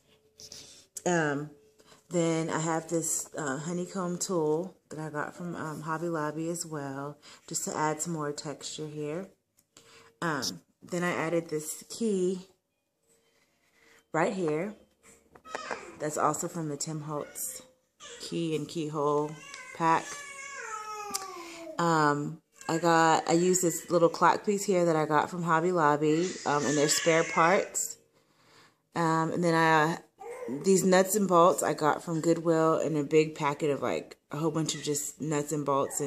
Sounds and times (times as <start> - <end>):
Inside, small room: 0.0 - 36.0
Babbling: 15.5 - 16.0, 19.4 - 21.5, 30.2 - 30.6.